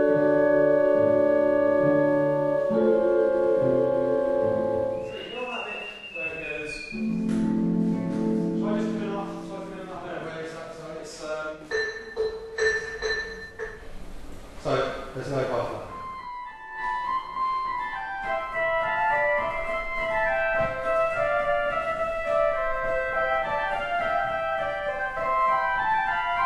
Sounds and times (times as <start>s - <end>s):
Music: 0.0s - 10.7s, 11.7s - 14.0s, 15.5s - 26.4s
Speech: 5.1s - 6.9s, 8.6s - 11.7s, 14.6s - 15.9s.